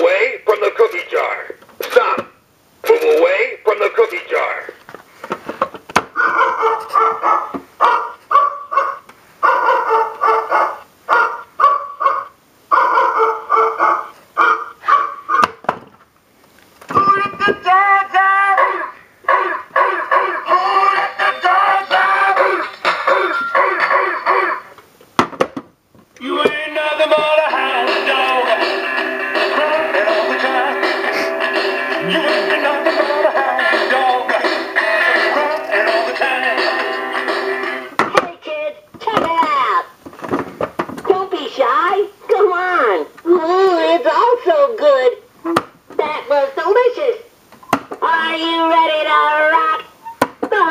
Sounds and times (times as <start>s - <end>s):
Male singing: 16.9s - 19.0s, 20.3s - 23.4s, 26.2s - 31.3s, 31.9s - 37.2s
Music: 20.0s - 24.7s, 26.2s - 38.0s.